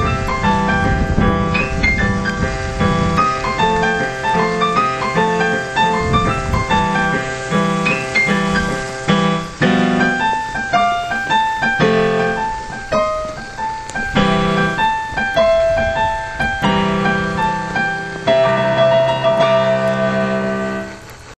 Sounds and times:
Music: 0:00.0 - 0:21.3.

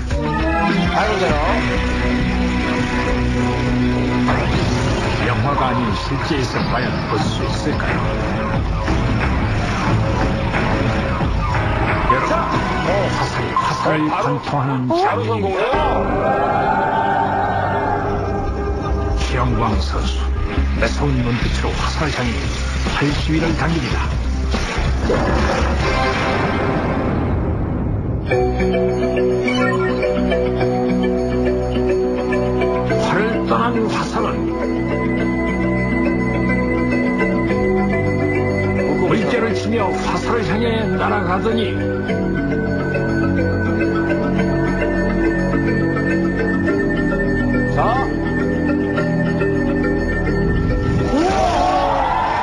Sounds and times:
Music: 0:00.0 - 0:52.4
Speech: 0:12.1 - 0:15.9, 0:20.8 - 0:22.4.

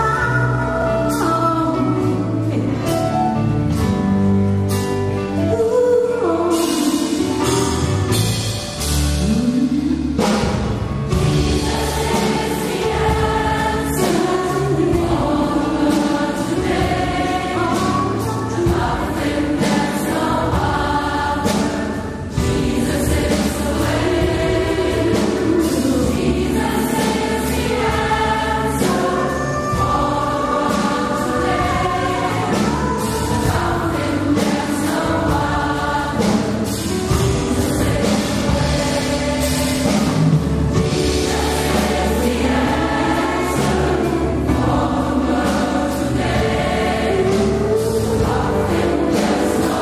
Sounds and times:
Choir: 0:11.1 - 0:49.8.

